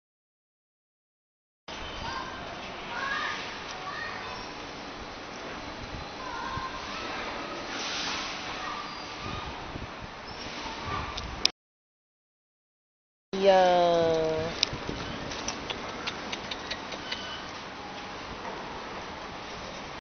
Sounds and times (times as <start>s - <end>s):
Speech: 13.4s - 14.6s.